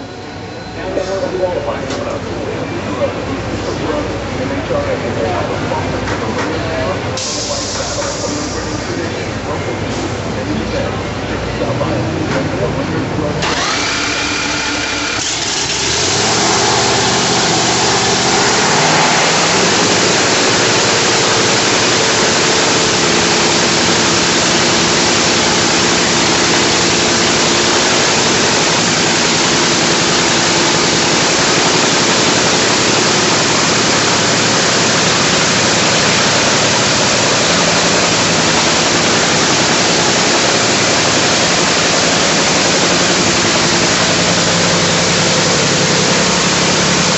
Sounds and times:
Vehicle: 0.0s - 47.1s
Speech: 0.6s - 13.4s.

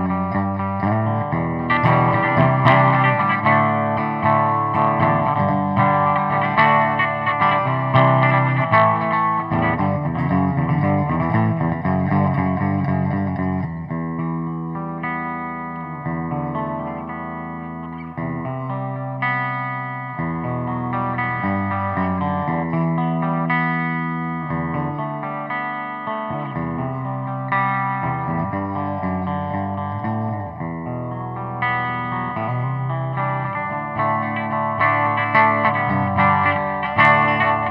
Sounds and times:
Effects unit: 0.0s - 37.7s
Guitar: 0.0s - 37.7s.

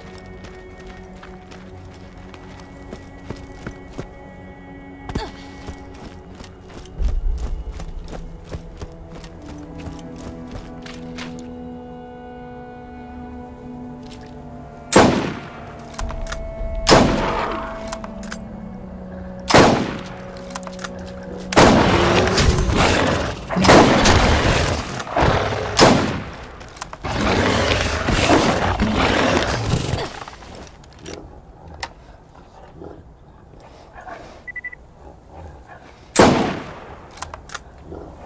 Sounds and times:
Outside, rural or natural: 0.0s - 38.2s.

